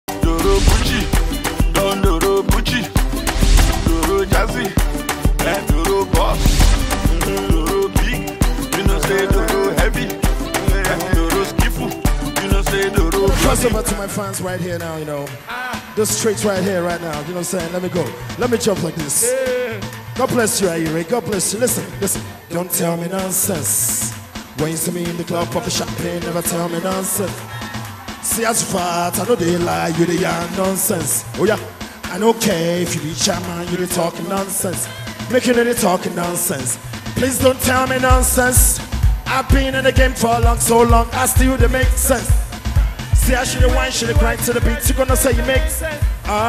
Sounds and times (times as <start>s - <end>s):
Afrobeat: 0.0s - 46.4s
Singing: 0.1s - 21.0s, 21.6s - 38.7s.